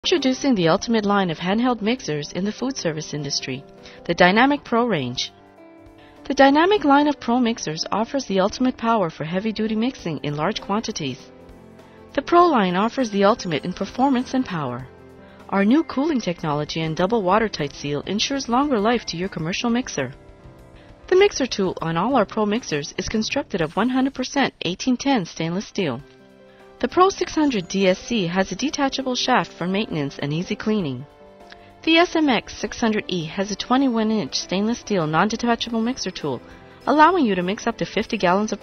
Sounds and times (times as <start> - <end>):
Speech: 0.0 - 5.3, 6.3 - 11.2, 12.2 - 14.9, 15.5 - 20.1, 21.1 - 26.0, 26.8 - 31.0, 31.8 - 38.6
Music: 0.0 - 38.6.